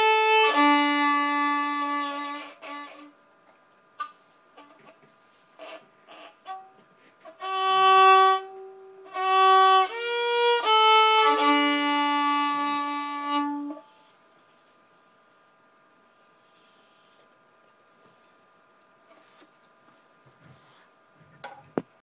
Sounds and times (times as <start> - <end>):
Violin, fiddle: 0.0 - 3.2, 5.6 - 14.0.